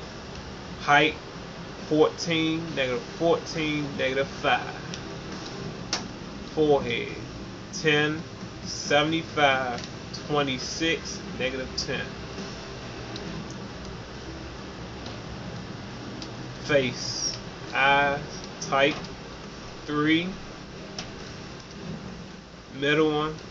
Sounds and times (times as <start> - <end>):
Speech: 0.8 - 1.2, 1.9 - 4.9, 6.6 - 7.2, 7.8 - 12.1, 16.6 - 19.0, 19.9 - 20.4, 22.8 - 23.4.